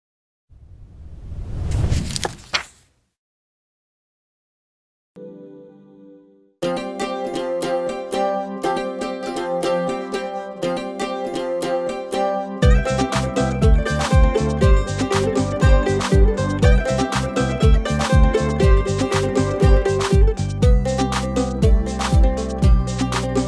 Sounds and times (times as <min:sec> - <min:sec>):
Music: 0:05.2 - 0:23.4.